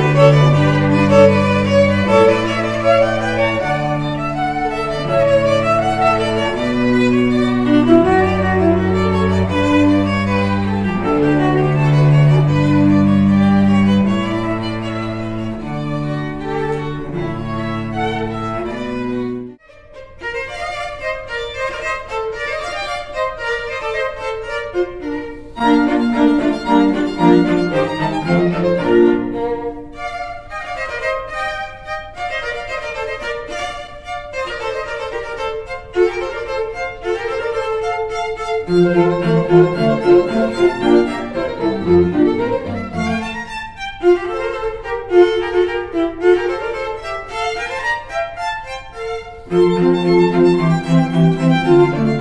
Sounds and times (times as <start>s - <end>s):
Cello: 0.0s - 52.2s
String section: 0.0s - 52.2s
Violin, fiddle: 0.0s - 52.2s.